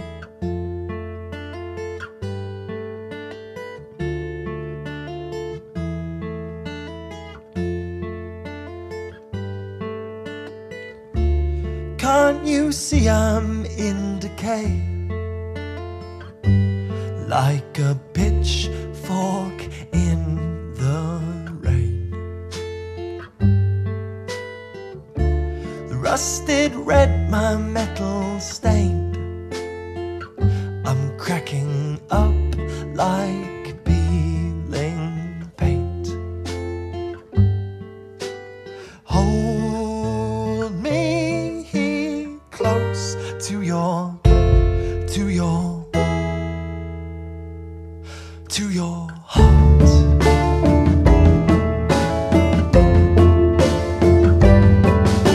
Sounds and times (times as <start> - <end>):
Music: 0.0 - 55.3.